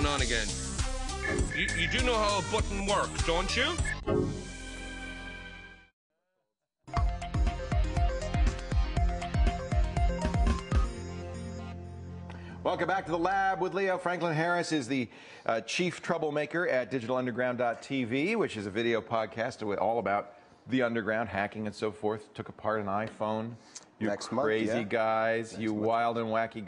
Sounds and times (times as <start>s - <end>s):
Music: 0.0s - 5.9s, 6.9s - 14.2s
Speech: 1.6s - 3.8s, 12.7s - 26.6s.